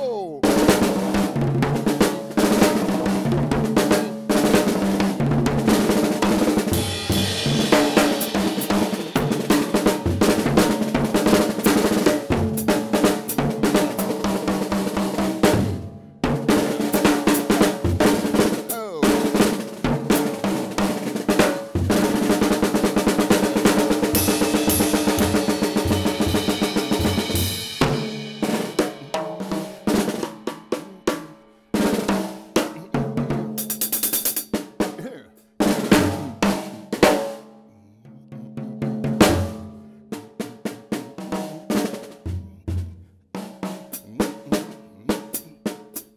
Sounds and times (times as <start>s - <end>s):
Drum: 0.0s - 14.0s, 16.3s - 34.3s, 35.0s - 37.3s, 38.4s - 39.6s, 40.7s - 45.8s
Drum kit: 0.0s - 37.4s, 38.4s - 46.1s.